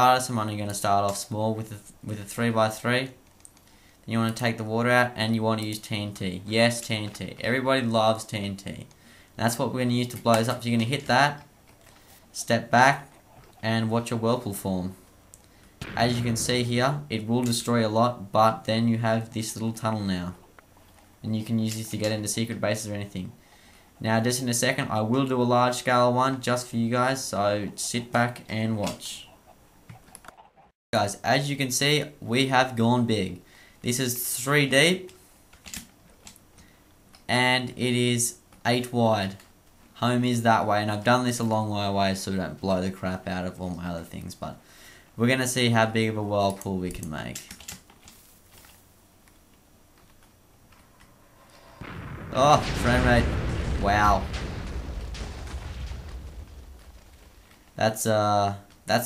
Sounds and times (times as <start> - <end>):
Speech: 0.0 - 3.2, 4.1 - 11.4, 12.4 - 15.0, 15.8 - 20.4, 21.2 - 23.4, 24.0 - 29.3, 31.0 - 35.2, 37.3 - 39.4, 40.0 - 44.6, 45.2 - 47.5, 52.3 - 54.3, 57.8 - 59.0
Burst, pop: 15.8 - 16.8, 51.4 - 57.8.